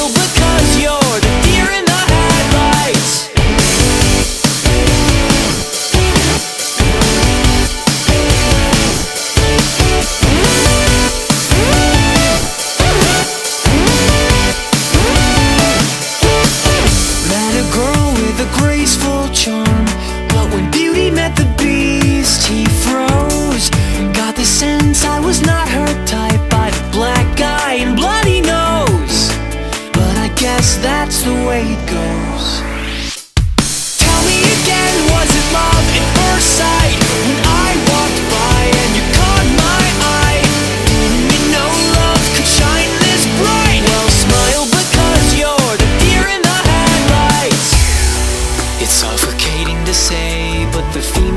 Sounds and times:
Music: 0.0s - 51.3s.

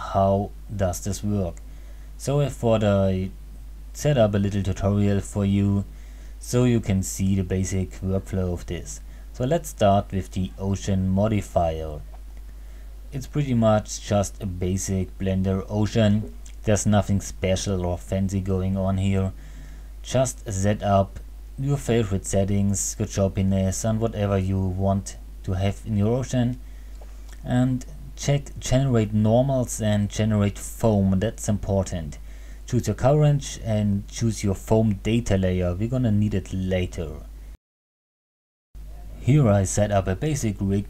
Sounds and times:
Speech: 0.0s - 1.6s, 2.2s - 3.4s, 4.0s - 12.1s, 13.1s - 19.4s, 20.0s - 26.6s, 27.4s - 37.3s, 38.9s - 40.8s.

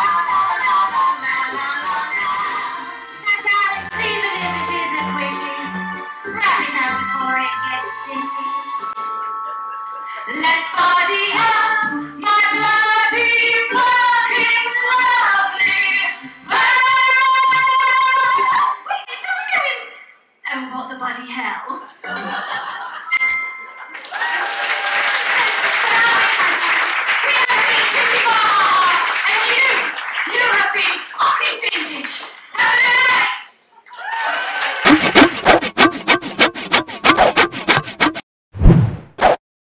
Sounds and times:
Music: 0.0s - 18.8s, 34.8s - 38.2s
Chuckle, chortle: 22.0s - 23.1s.

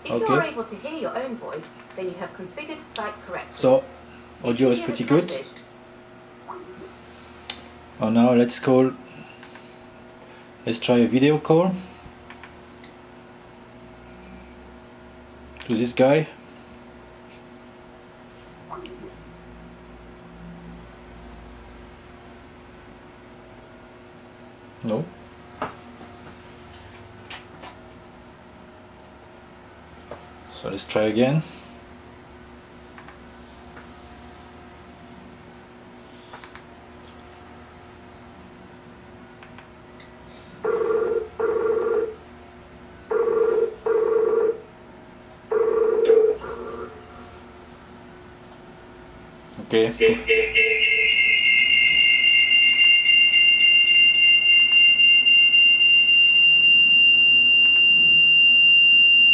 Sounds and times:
Speech: 0.0s - 5.6s, 15.6s - 16.4s, 24.8s - 25.1s, 49.6s - 50.2s.

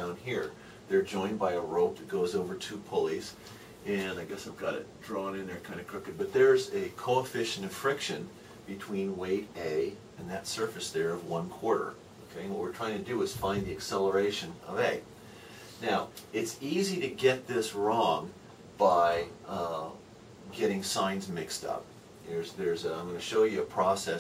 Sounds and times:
Speech: 0.0s - 15.1s, 15.8s - 24.2s.

